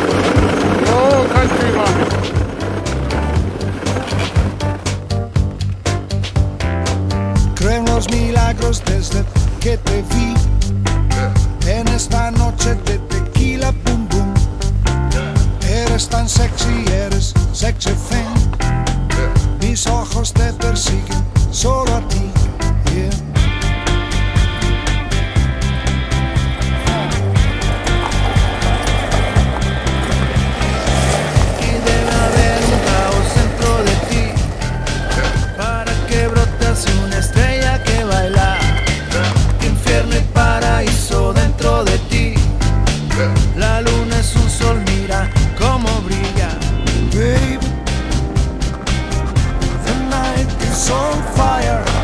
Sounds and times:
Funk: 0.0s - 52.0s.

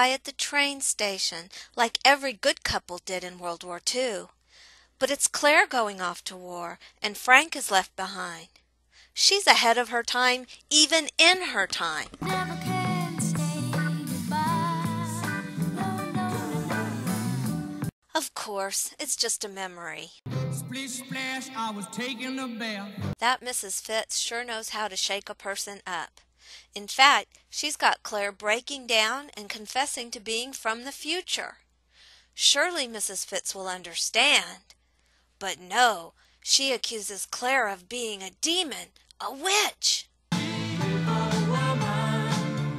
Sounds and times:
Speech: 0.0s - 4.3s, 5.0s - 8.5s, 9.2s - 12.2s, 18.2s - 31.6s, 32.4s - 34.7s, 35.4s - 40.1s
Music: 12.2s - 17.9s, 20.3s - 23.2s, 40.3s - 42.7s.

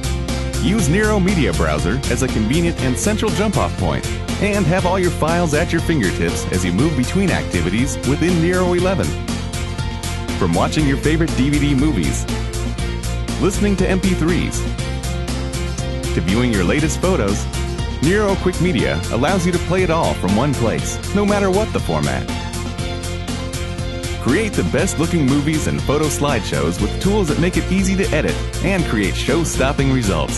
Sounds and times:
Music: 0.0s - 30.3s
Speech: 0.6s - 9.2s, 10.4s - 12.3s, 13.4s - 14.7s, 16.2s - 17.4s, 18.0s - 22.3s, 24.2s - 30.3s.

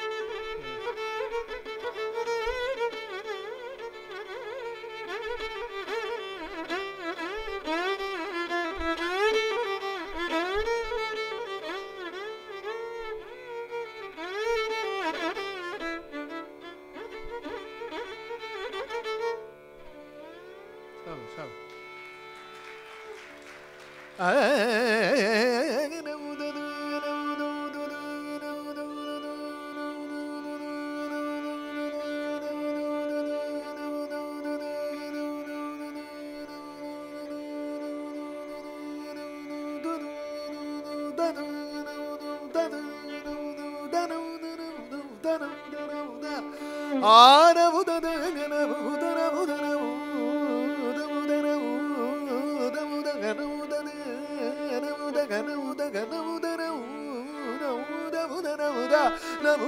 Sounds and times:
Carnatic music: 0.0s - 59.6s.

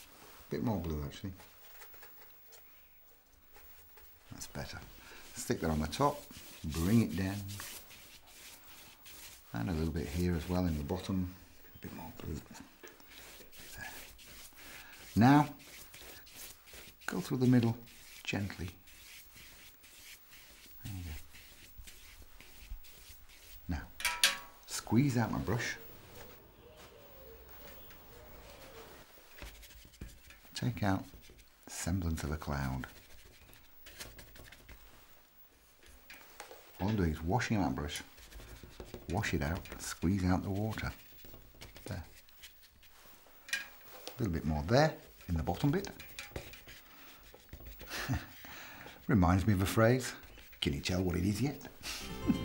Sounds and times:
Inside, small room: 0.0s - 52.4s
Speech: 0.5s - 1.4s, 4.3s - 7.6s, 9.5s - 12.6s, 15.2s - 15.6s, 17.1s - 18.8s, 24.7s - 25.8s, 30.6s - 31.1s, 31.7s - 32.9s, 36.8s - 38.1s, 39.1s - 41.0s, 44.2s - 46.0s, 49.1s - 51.7s.

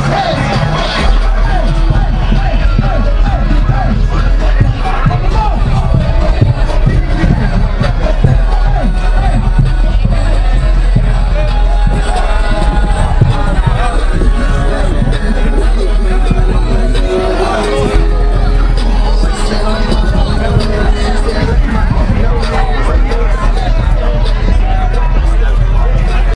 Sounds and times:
Music: 0.0s - 26.3s.

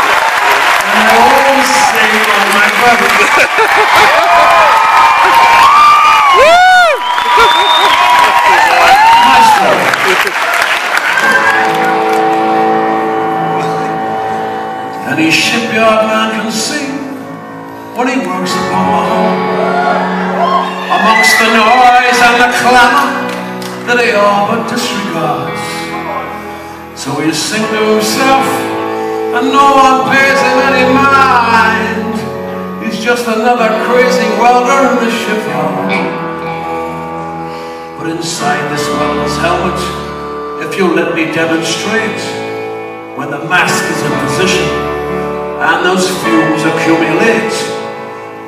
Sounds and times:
Music: 0.0s - 48.4s
Male singing: 15.0s - 17.2s, 18.0s - 19.4s, 21.0s - 23.1s, 23.9s - 25.8s, 27.0s - 28.7s, 29.4s - 36.1s, 38.0s - 40.0s, 40.6s - 42.4s, 43.2s - 44.8s, 45.6s - 47.8s.

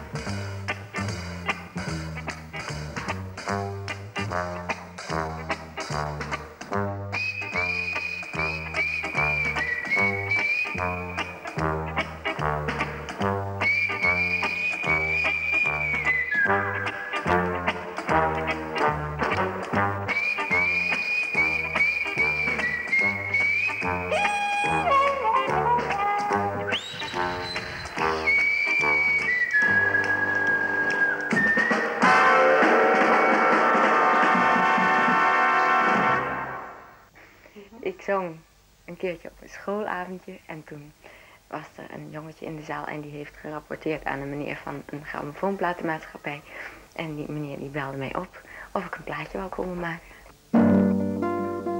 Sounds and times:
Music: 0.0s - 37.1s, 50.4s - 51.7s.

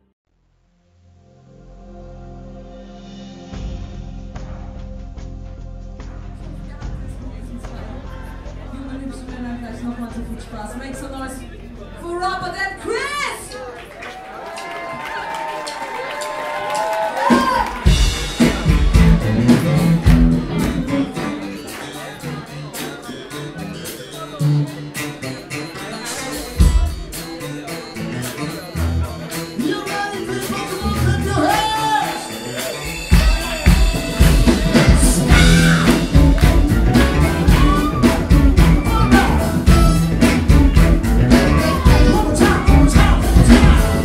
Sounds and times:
Exciting music: 1.3s - 10.7s, 17.2s - 22.5s, 26.4s - 44.0s
Speech: 6.4s - 13.9s, 21.1s - 33.9s
Funk: 17.3s - 44.0s.

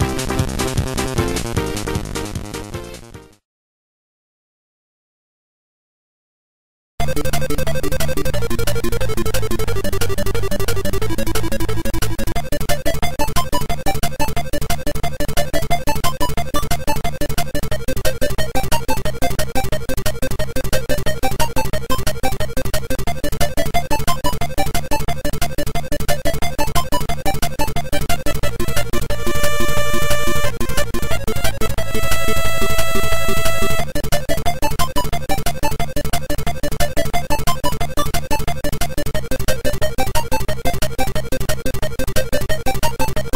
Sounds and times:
Music: 0.0s - 3.5s, 7.0s - 43.3s.

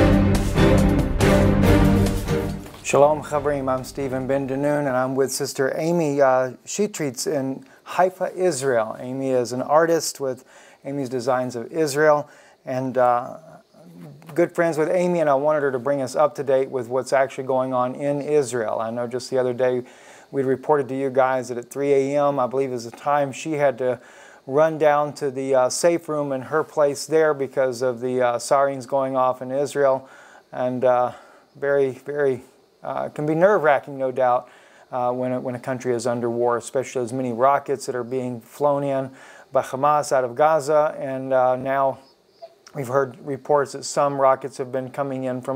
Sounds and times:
Speech: 2.8s - 42.0s, 42.7s - 45.5s.

